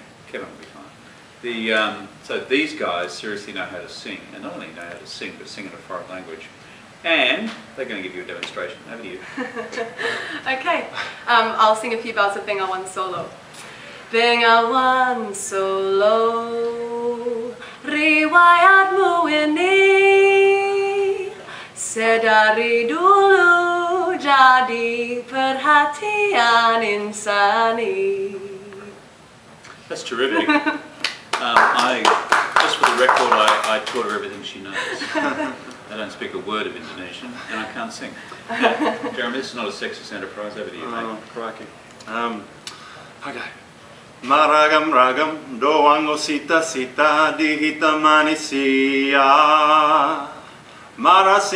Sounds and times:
Female singing: 14.2 - 29.0.

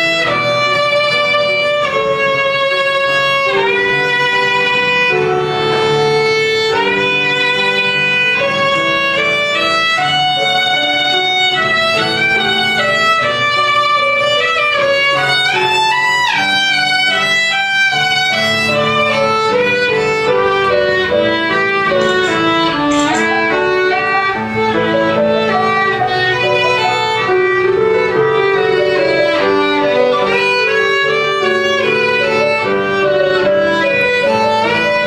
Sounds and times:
Violin, fiddle: 0.0 - 35.0.

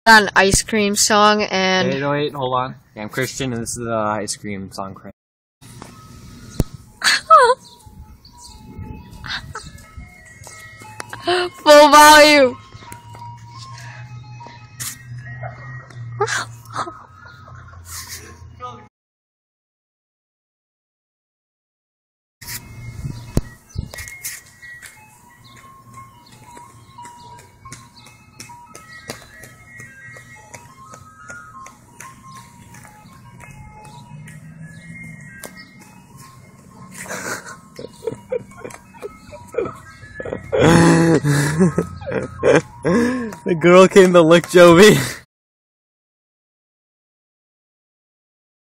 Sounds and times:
Music: 5.6 - 16.2, 22.6 - 45.0.

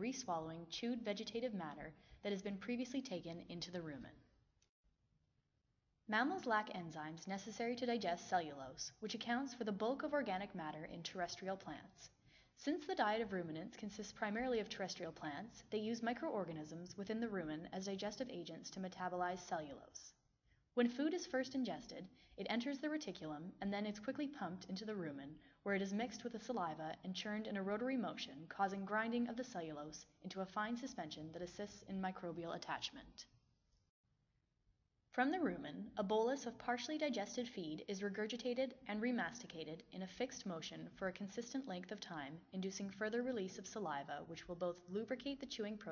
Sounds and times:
Speech: 0.0 - 4.2, 6.1 - 20.2, 20.8 - 33.3, 35.2 - 45.9.

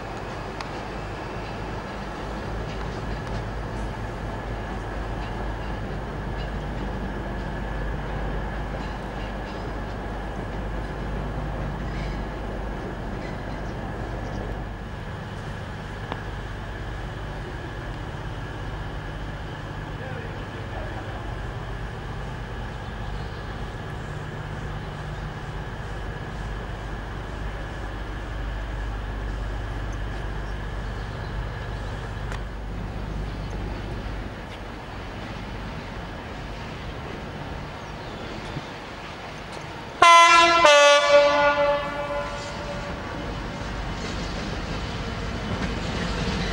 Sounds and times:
Train horn: 40.0 - 43.4.

